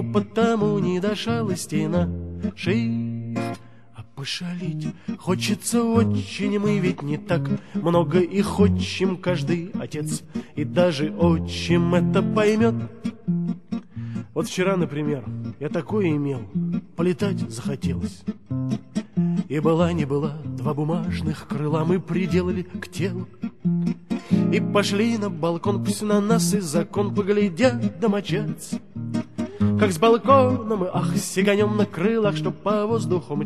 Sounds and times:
Music: 0:00.0 - 0:33.4.

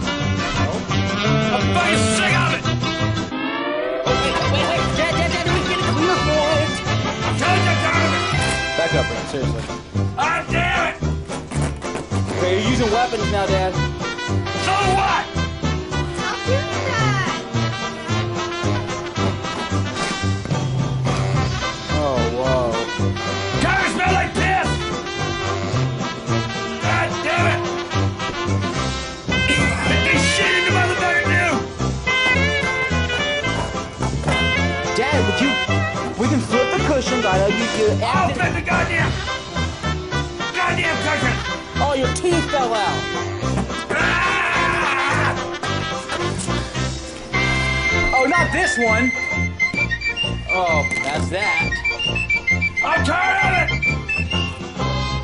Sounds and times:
Music: 0:00.0 - 0:55.2.

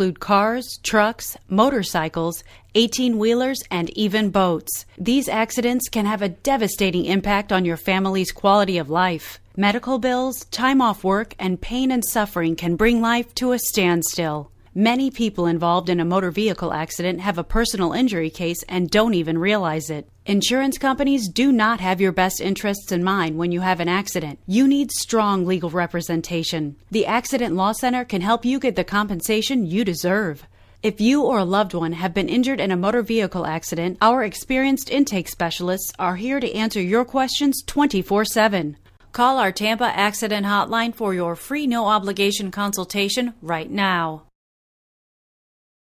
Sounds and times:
Speech: 0:00.0 - 0:44.3.

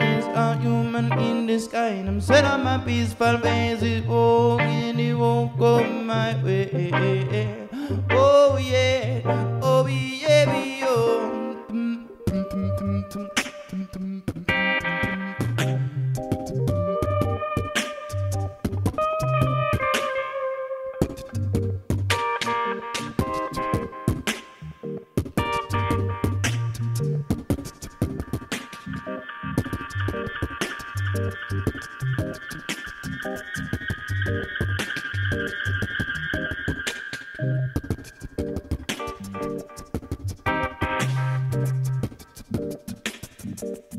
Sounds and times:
Beatboxing: 0:00.0 - 0:20.3, 0:21.0 - 0:43.9
Guitar: 0:00.0 - 0:43.9.

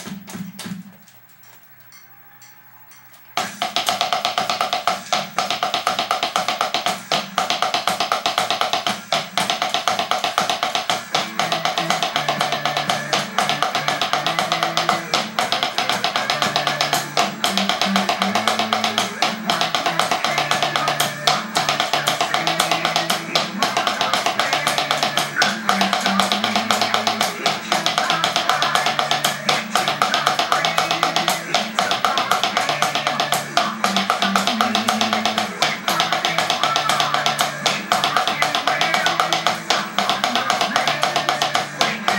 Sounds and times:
Wood block: 0:01.4 - 0:42.1.

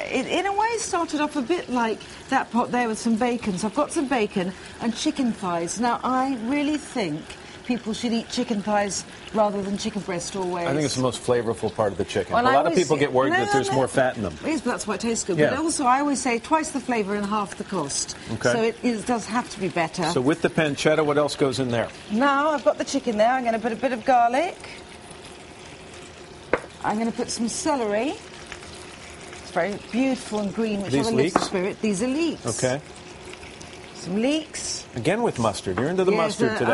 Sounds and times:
Frying (food): 0:00.0 - 0:36.7.

